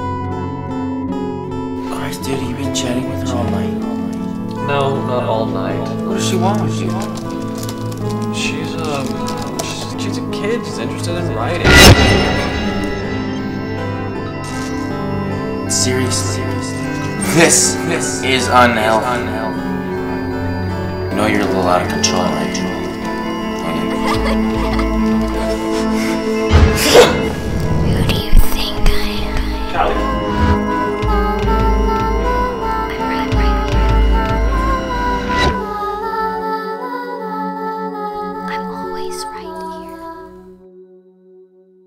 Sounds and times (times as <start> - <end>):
Music: 0.0 - 41.8.